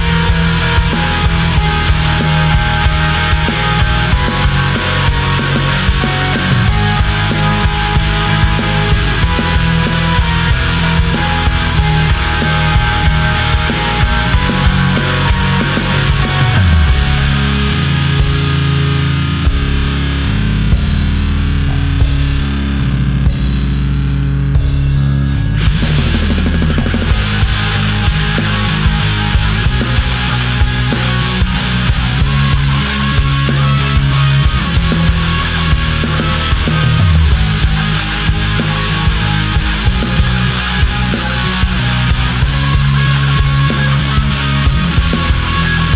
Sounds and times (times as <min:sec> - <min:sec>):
Music: 0:00.0 - 0:45.9.